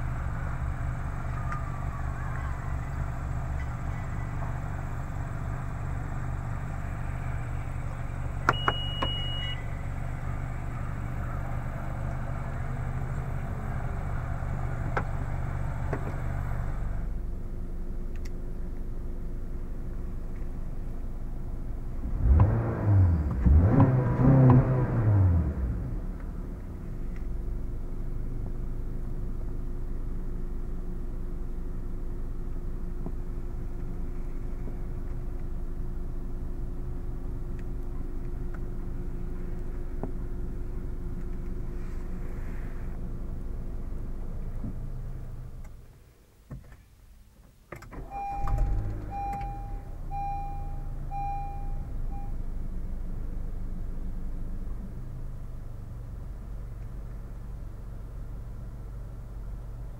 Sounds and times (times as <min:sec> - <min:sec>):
Car: 0:00.0 - 0:59.9
Outside, rural or natural: 0:00.0 - 0:59.9.